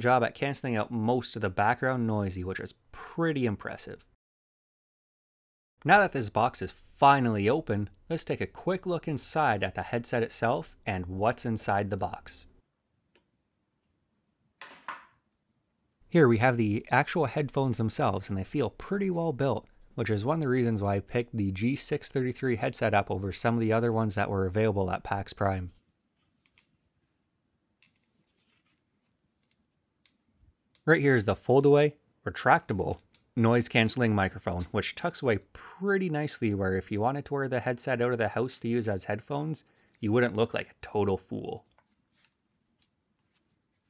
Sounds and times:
Speech: 0.0s - 4.1s, 5.8s - 12.5s, 16.1s - 25.8s, 30.9s - 41.7s.

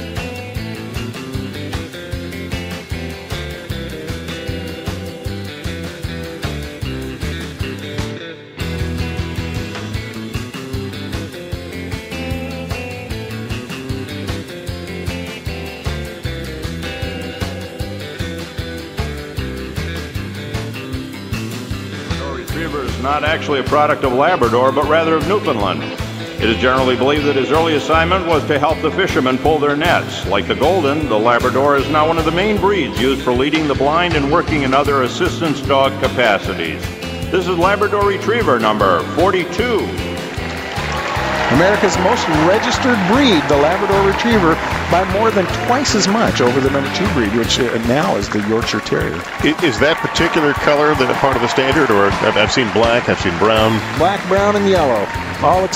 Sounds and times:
Music: 0.0s - 55.7s
Speech: 22.0s - 40.0s, 41.5s - 55.7s.

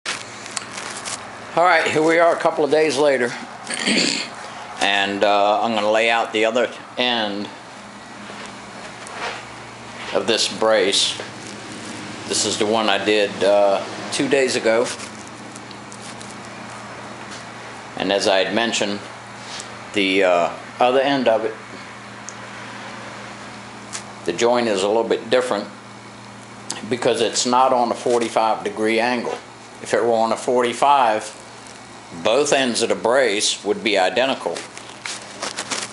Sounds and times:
Speech: 1.6s - 3.4s, 4.8s - 7.6s, 10.1s - 11.3s, 12.3s - 15.0s, 18.0s - 19.1s, 20.0s - 21.6s, 24.3s - 25.8s, 26.7s - 31.4s, 32.1s - 34.7s.

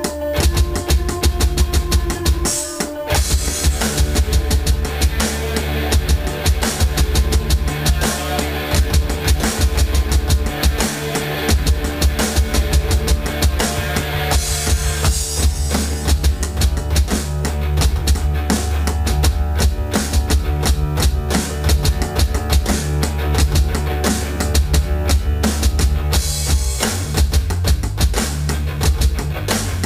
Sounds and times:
Drum: 0.0s - 29.8s
Drum kit: 0.0s - 29.8s
Hi-hat: 0.0s - 29.8s
Rock music: 0.0s - 29.8s.

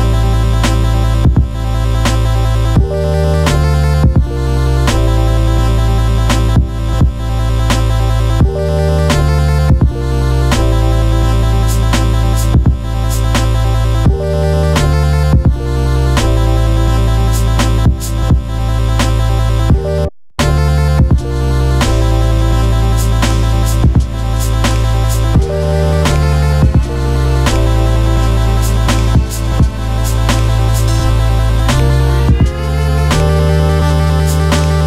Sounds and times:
Video game music: 0.0s - 34.8s.

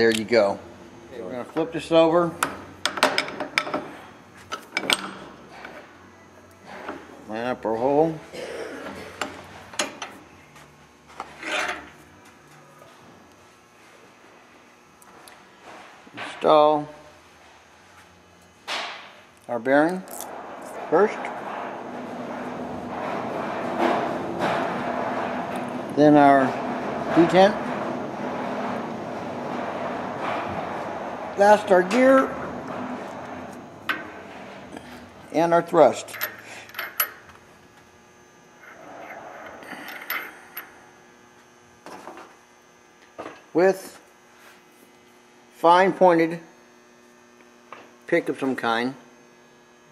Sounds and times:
Speech: 0.0s - 2.4s, 7.3s - 8.2s, 16.2s - 17.0s, 19.5s - 20.1s, 20.9s - 21.3s, 26.0s - 27.6s, 31.4s - 32.4s, 35.3s - 36.1s, 43.5s - 44.0s, 45.6s - 46.5s, 48.1s - 49.0s.

